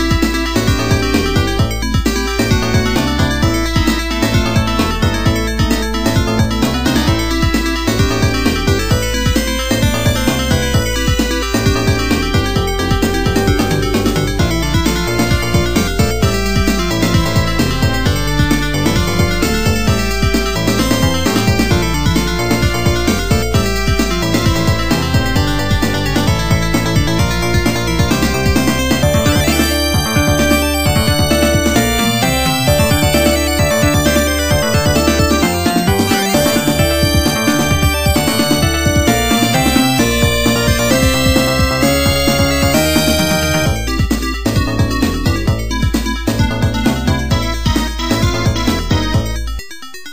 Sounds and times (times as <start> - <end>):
Music: 0.0 - 50.1.